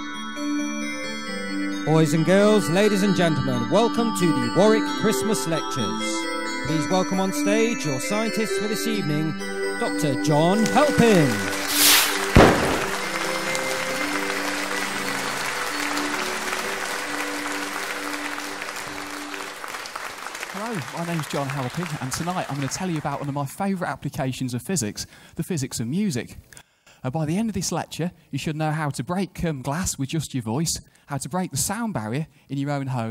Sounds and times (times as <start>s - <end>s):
Music: 0.0s - 23.4s
Speech: 1.8s - 11.4s, 20.5s - 26.4s, 27.0s - 33.1s.